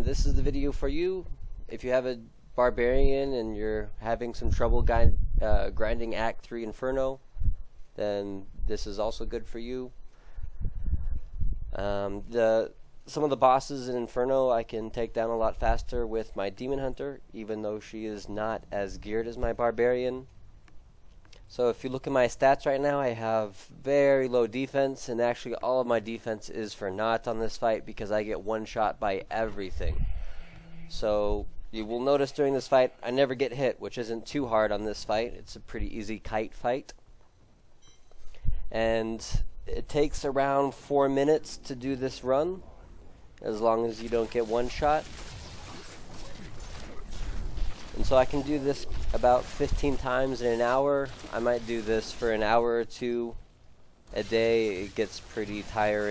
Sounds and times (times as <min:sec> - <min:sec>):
Speech: 0:00.0 - 0:07.2, 0:08.0 - 0:09.9, 0:11.7 - 0:20.3, 0:21.5 - 0:30.0, 0:30.9 - 0:37.0, 0:38.7 - 0:42.7, 0:43.4 - 0:45.0, 0:48.0 - 0:53.4, 0:54.1 - 0:56.1.